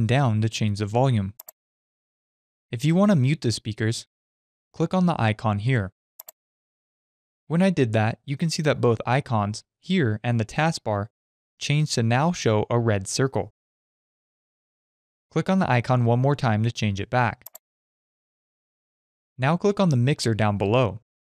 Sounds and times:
Speech: 0.0 - 1.4, 2.8 - 4.1, 4.8 - 6.0, 7.5 - 13.6, 15.3 - 17.5, 19.4 - 21.1.

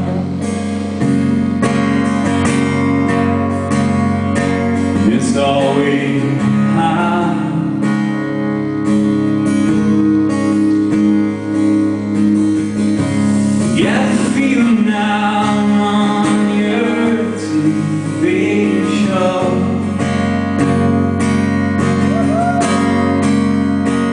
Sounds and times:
Music: 0.0 - 24.1.

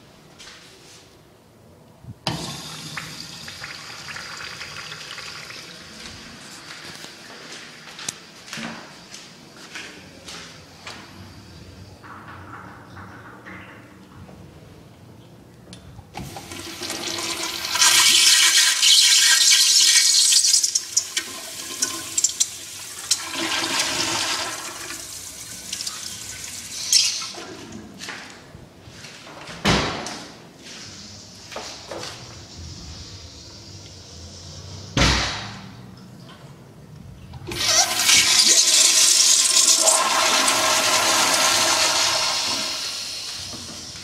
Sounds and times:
Toilet flush: 2.3 - 6.1, 16.2 - 27.5, 37.5 - 44.0.

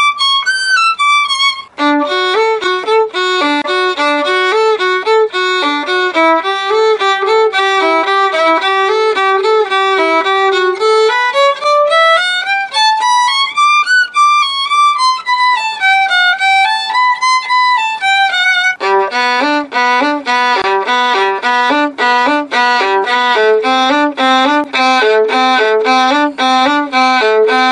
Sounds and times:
Violin, fiddle: 0.0 - 27.7.

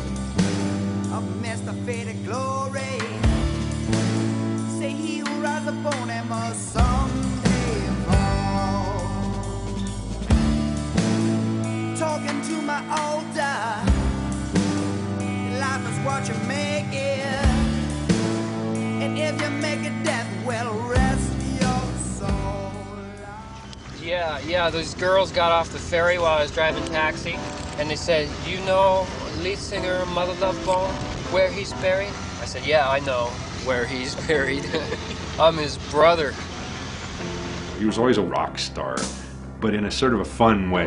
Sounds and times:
Music: 0.0 - 40.8.

